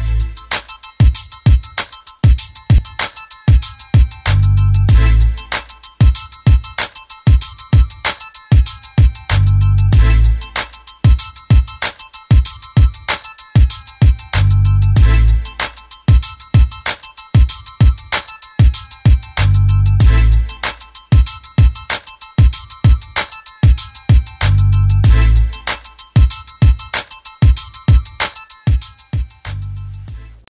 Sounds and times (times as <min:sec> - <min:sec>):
Music: 0:00.0 - 0:30.5.